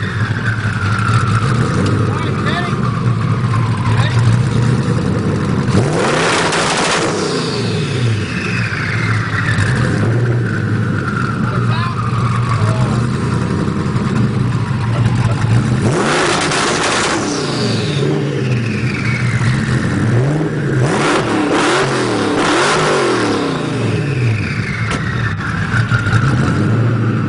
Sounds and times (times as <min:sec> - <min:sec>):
Car: 0:00.0 - 0:27.2.